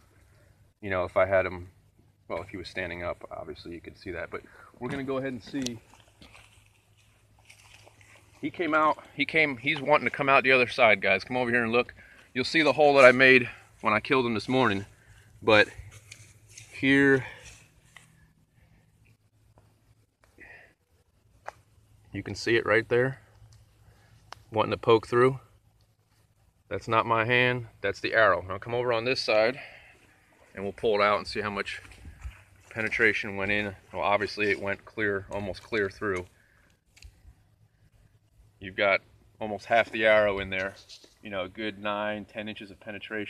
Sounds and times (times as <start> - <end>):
Speech: 0.8 - 1.7, 2.3 - 5.8, 8.4 - 15.8, 16.6 - 17.5, 22.1 - 23.2, 24.5 - 25.5, 26.7 - 29.8, 30.5 - 32.0, 32.7 - 36.3, 38.6 - 43.2.